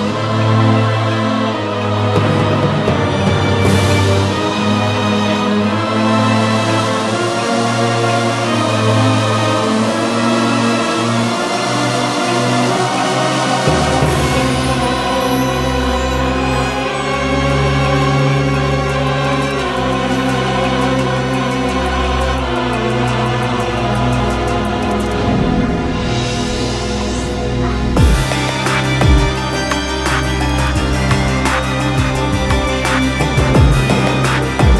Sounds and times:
Music: 0.0 - 34.8.

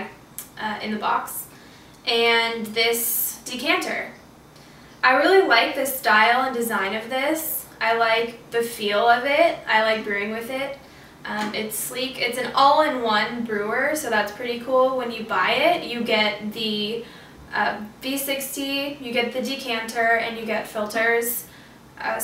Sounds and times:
Speech: 0.0 - 1.5, 2.1 - 4.2, 5.0 - 22.2.

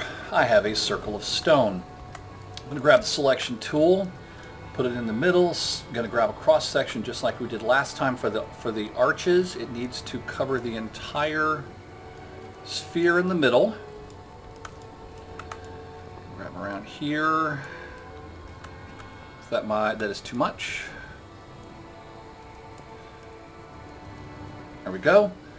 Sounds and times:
Music: 0.0 - 25.5
Speech: 0.3 - 1.8, 2.6 - 4.1, 4.8 - 11.7, 12.7 - 13.8, 16.3 - 17.7, 19.5 - 21.1, 24.9 - 25.4.

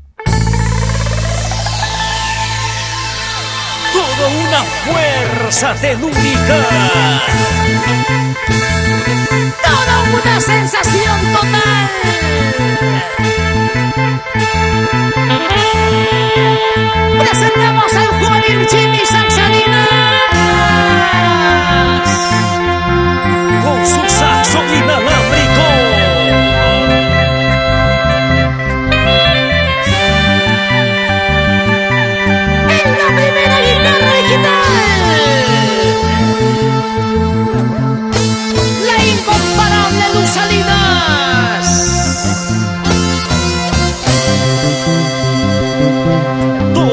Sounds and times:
Music: 0.0 - 46.9.

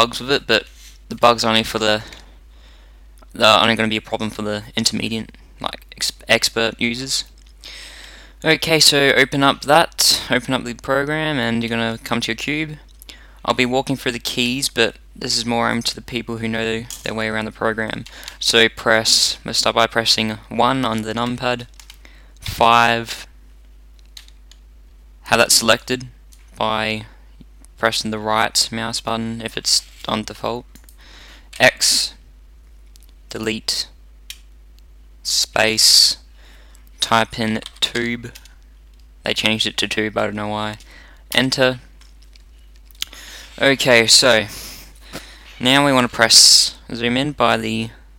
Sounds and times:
Speech: 0.0 - 2.2, 3.3 - 7.3, 8.4 - 12.8, 13.4 - 21.7, 22.4 - 23.3, 25.3 - 27.2, 27.8 - 30.7, 31.6 - 32.2, 33.3 - 34.0, 35.2 - 36.2, 37.0 - 38.4, 39.2 - 41.9, 43.6 - 44.5, 45.6 - 48.0.

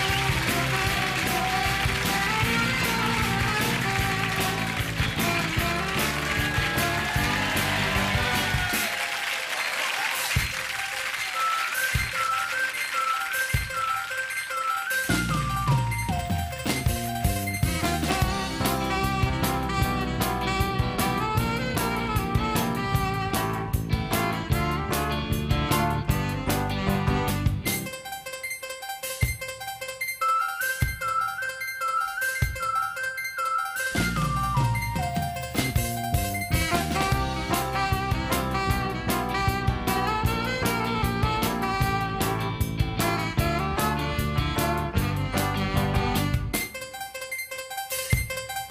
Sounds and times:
Swing music: 0.0 - 48.7.

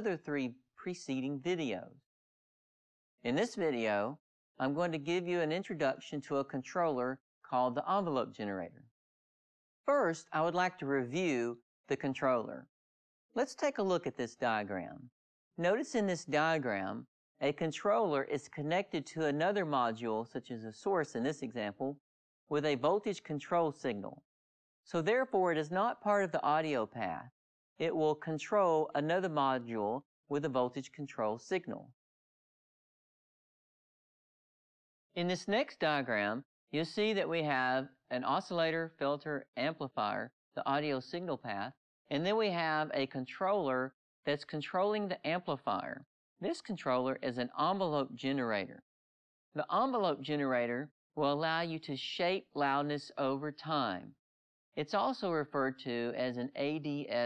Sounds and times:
Speech: 0.0 - 2.0, 3.3 - 8.8, 9.9 - 12.7, 13.4 - 24.2, 24.9 - 32.0, 35.2 - 48.8, 49.6 - 54.2, 54.8 - 57.2.

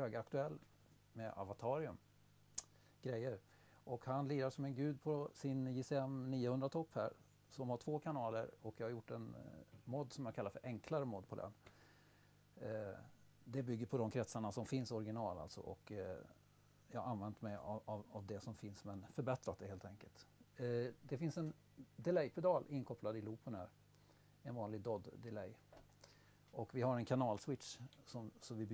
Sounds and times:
Speech: 0.0 - 2.0, 3.0 - 11.6, 12.6 - 23.8, 24.4 - 25.6, 26.5 - 28.7.

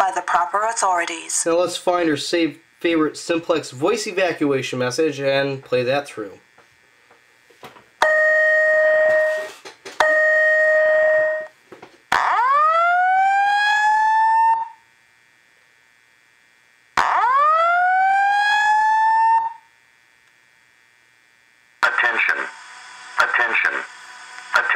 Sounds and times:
Speech: 0.0 - 6.4, 21.8 - 22.6, 23.2 - 24.7
Fire alarm: 8.0 - 14.9, 17.0 - 19.8.

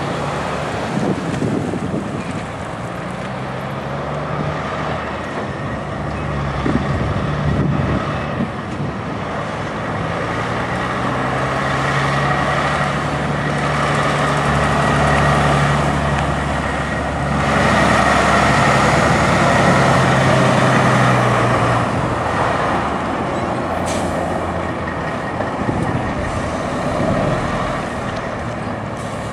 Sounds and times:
Truck: 0.0 - 29.3.

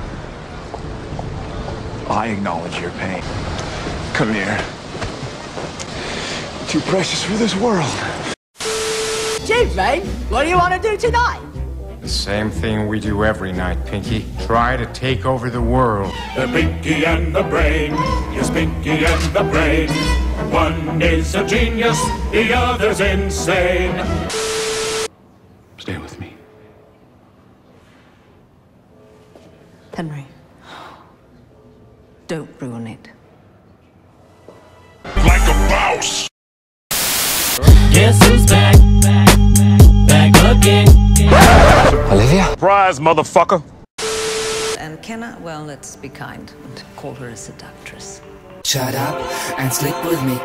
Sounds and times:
Music: 9.4 - 24.4, 34.4 - 36.3, 37.6 - 42.6, 45.2 - 50.4.

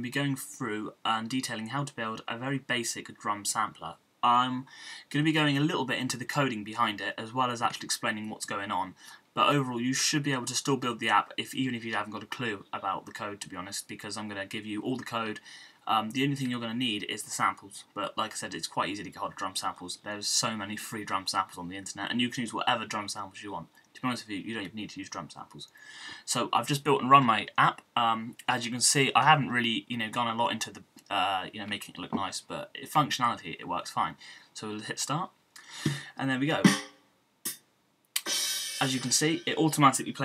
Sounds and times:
Speech: 0.0 - 36.7, 38.8 - 40.2.

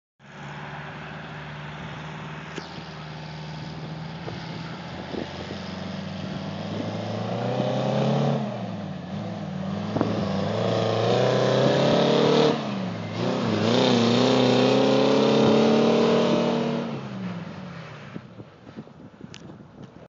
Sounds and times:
Truck: 0.2 - 20.0.

